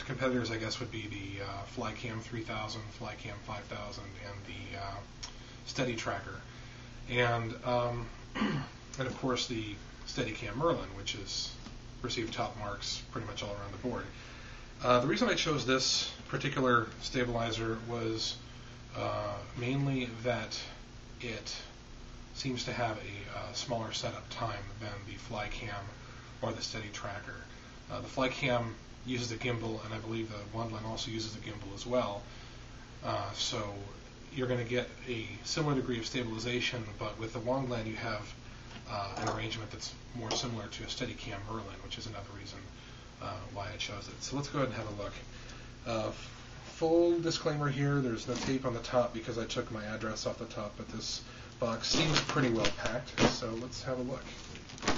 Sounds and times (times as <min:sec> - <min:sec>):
Speech: 0:00.0 - 0:06.5, 0:07.1 - 0:14.2, 0:14.8 - 0:21.8, 0:22.4 - 0:32.3, 0:33.0 - 0:54.5.